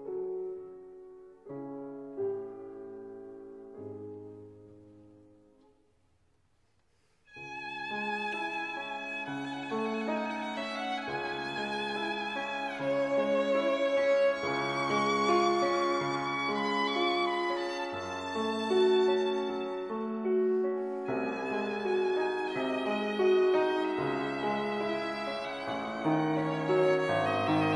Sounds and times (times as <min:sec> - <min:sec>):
Violin, fiddle: 0:07.3 - 0:27.7.